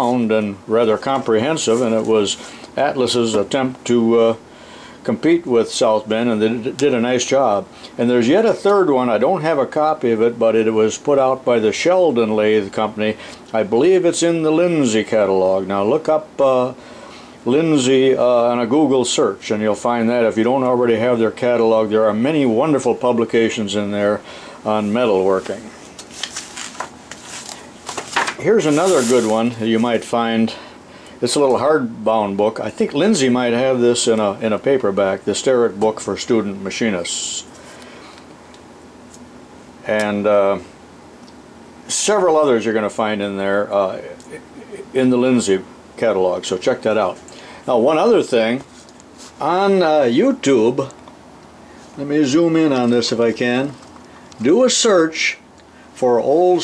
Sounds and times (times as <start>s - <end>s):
Speech: 0.0s - 4.4s, 5.0s - 16.8s, 17.4s - 25.8s, 28.4s - 30.6s, 31.2s - 37.6s, 39.8s - 40.7s, 41.9s - 48.7s, 49.4s - 51.0s, 52.0s - 55.4s, 56.0s - 56.6s.